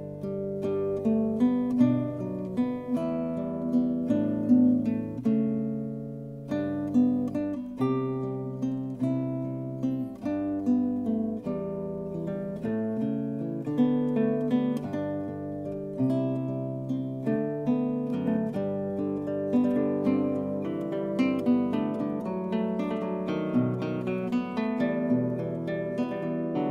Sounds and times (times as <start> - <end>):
Acoustic guitar: 0.0 - 26.7.